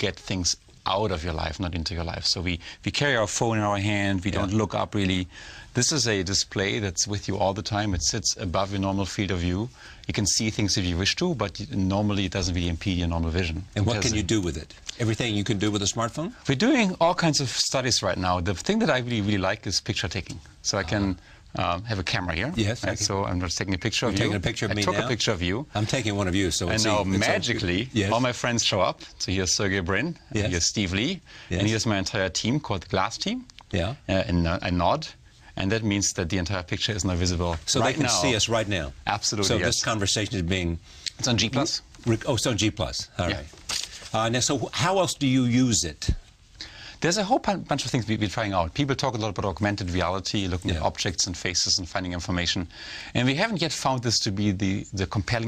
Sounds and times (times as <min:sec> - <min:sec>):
Speech: 0:00.0 - 0:46.2, 0:47.0 - 0:55.4.